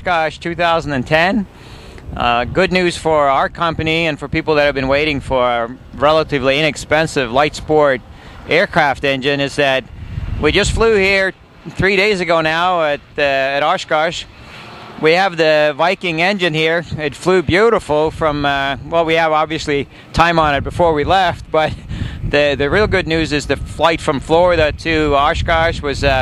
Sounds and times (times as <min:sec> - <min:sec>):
Speech: 0:00.0 - 0:01.5, 0:02.2 - 0:14.3, 0:15.0 - 0:26.2.